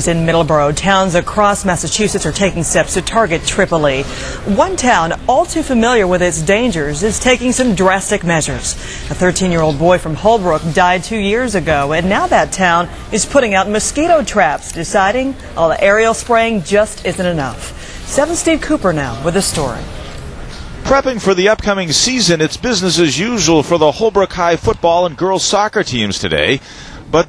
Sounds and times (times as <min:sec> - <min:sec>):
Speech: 0:00.0 - 0:19.9.